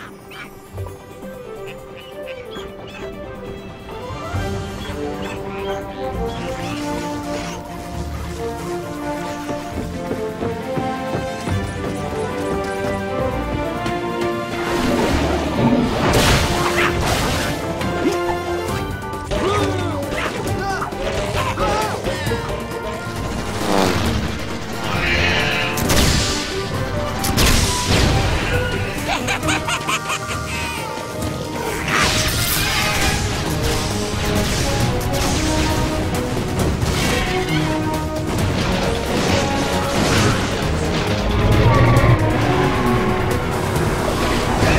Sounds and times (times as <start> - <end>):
Music: 0.0 - 44.7.